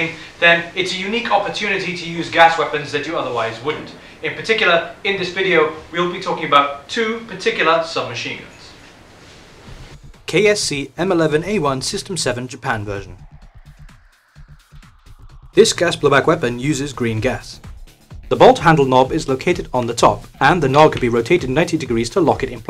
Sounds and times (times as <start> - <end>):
Music: 0.0 - 6.5, 9.6 - 22.7
Speech: 0.0 - 8.8, 10.3 - 13.2, 15.6 - 17.6, 18.3 - 22.7.